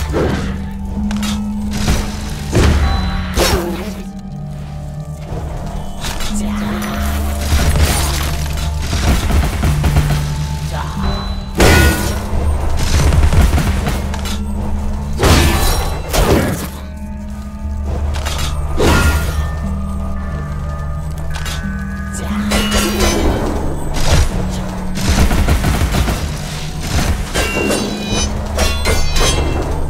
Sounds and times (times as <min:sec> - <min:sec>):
Fusillade: 0:08.8 - 0:10.4, 0:25.0 - 0:27.9.